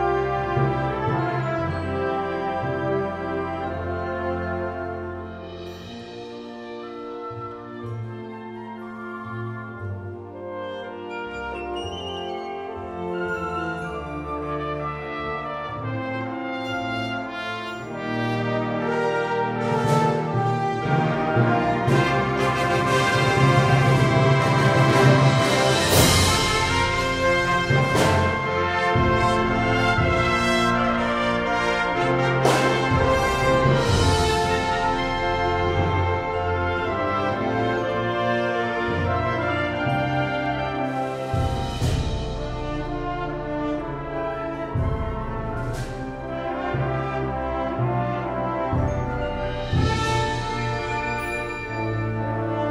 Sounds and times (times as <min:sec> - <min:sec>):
Orchestra: 0:00.0 - 0:52.7.